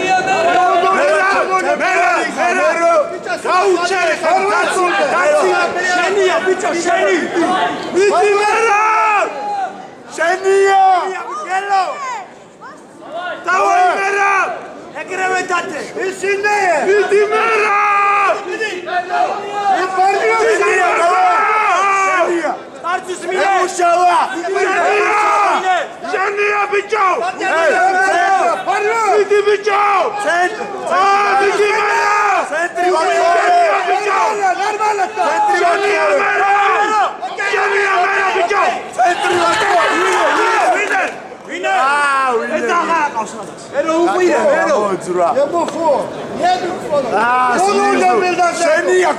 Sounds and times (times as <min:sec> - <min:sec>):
Speech: 0:00.0 - 0:49.1.